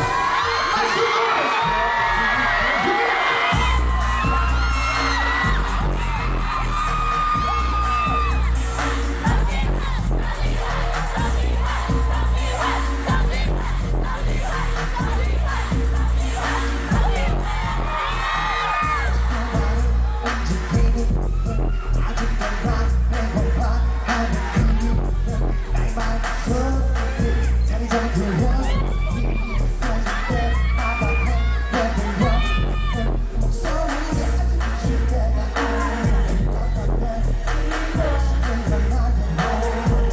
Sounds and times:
Music: 0.0 - 40.1.

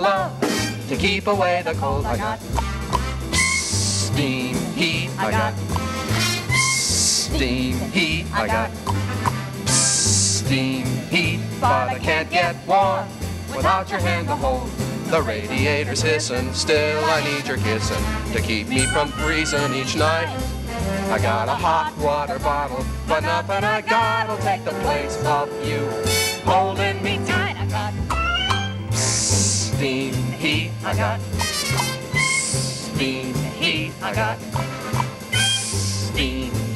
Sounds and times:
Music: 0.0 - 36.7.

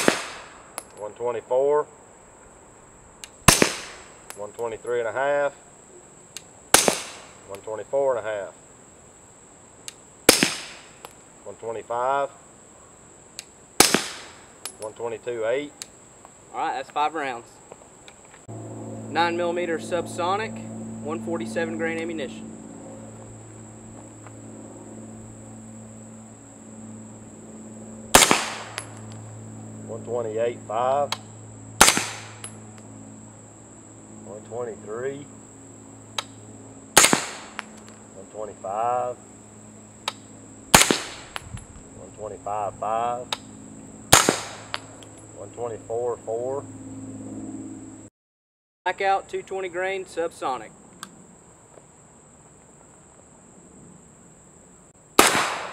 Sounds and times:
Speech: 1.0 - 1.9, 4.4 - 5.6, 7.5 - 8.6, 11.4 - 12.4, 14.8 - 15.8, 16.5 - 17.6, 19.1 - 22.4, 29.9 - 31.1, 34.2 - 35.3, 38.2 - 39.2, 42.0 - 43.3, 45.4 - 46.7, 48.9 - 50.7.

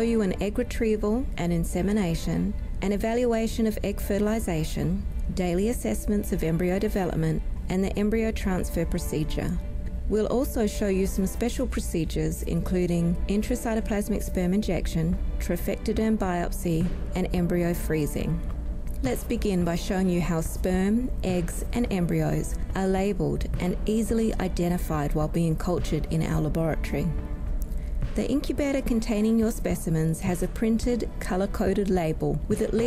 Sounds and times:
Speech: 0.0 - 18.4, 19.0 - 27.1, 28.2 - 32.8
Music: 0.0 - 32.8.

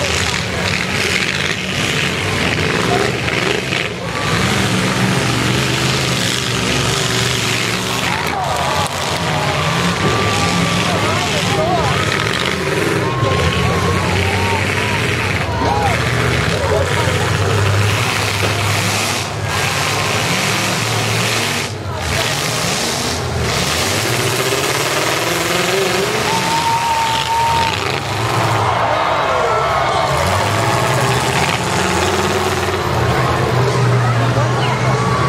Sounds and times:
Car: 0.0 - 35.2
Outside, rural or natural: 0.0 - 35.2.

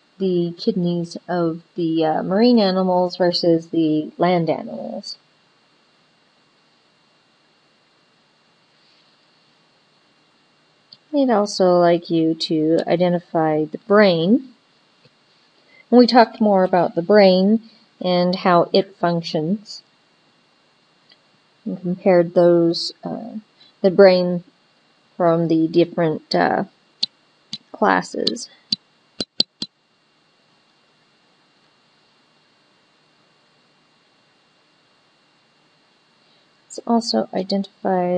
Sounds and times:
Speech: 0.2 - 5.2, 11.0 - 14.5, 15.9 - 19.8, 21.7 - 24.5, 25.2 - 26.7, 27.6 - 28.5, 36.7 - 38.1.

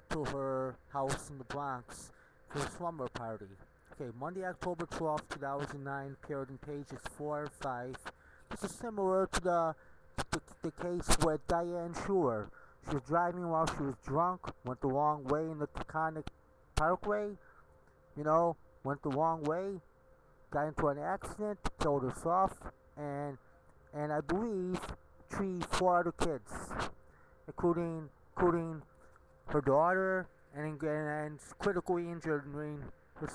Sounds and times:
Speech: 0.0 - 17.4, 18.2 - 19.8, 20.5 - 26.9, 27.5 - 28.9, 29.5 - 33.3.

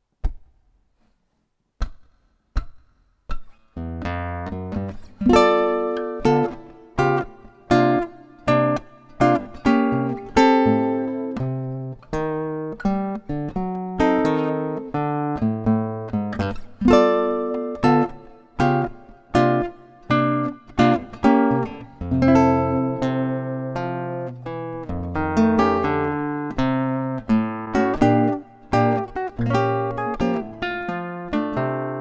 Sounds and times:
Strum: 2.6 - 32.0.

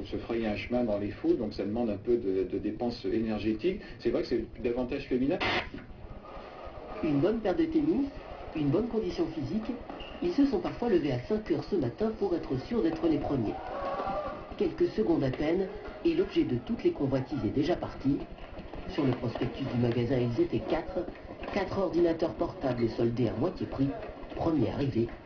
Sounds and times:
Speech: 0.0 - 5.4, 7.0 - 13.6, 14.5 - 25.2.

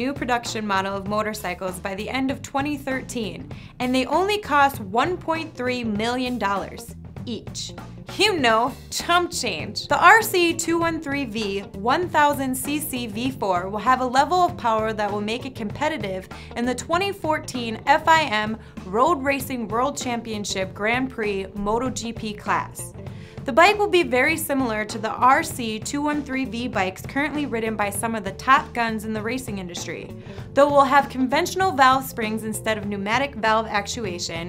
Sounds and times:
Speech: 0.0 - 22.9, 23.5 - 34.4
Music: 0.0 - 34.4.

